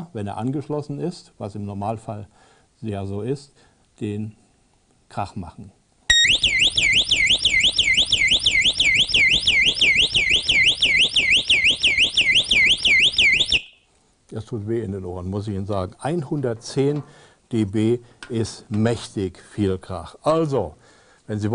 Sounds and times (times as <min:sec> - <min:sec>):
Speech: 0:00.0 - 0:04.4, 0:05.1 - 0:05.8, 0:14.3 - 0:21.5
Siren: 0:06.1 - 0:13.8.